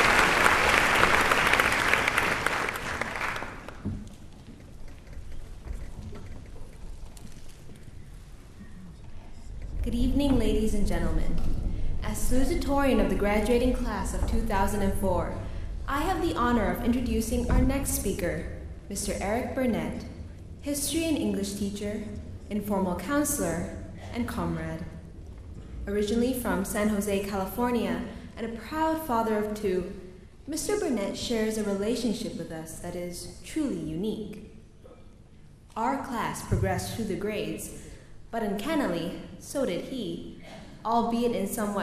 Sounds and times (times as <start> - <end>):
Narration, monologue: 9.2 - 41.8
Female speech, woman speaking: 9.8 - 20.1, 20.7 - 25.0, 25.9 - 34.4, 35.8 - 37.8, 38.4 - 41.8.